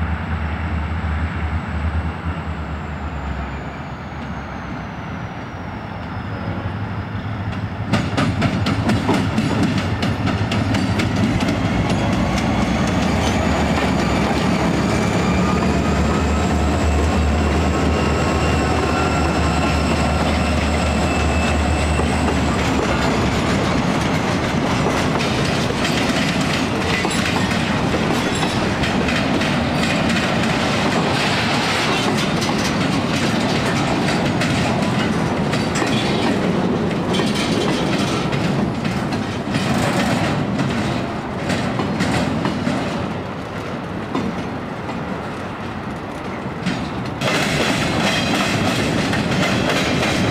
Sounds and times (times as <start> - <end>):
Outside, urban or manmade: 0.0 - 50.3
Railroad car, train wagon: 0.0 - 50.3
Train: 0.0 - 50.3.